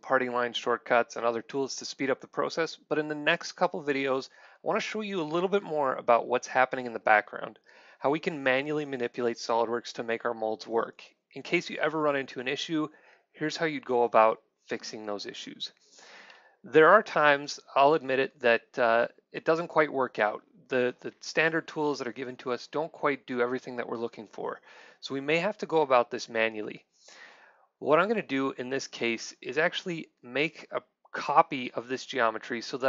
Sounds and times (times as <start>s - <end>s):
Speech: 0.0s - 15.8s, 16.7s - 26.9s, 27.8s - 32.8s.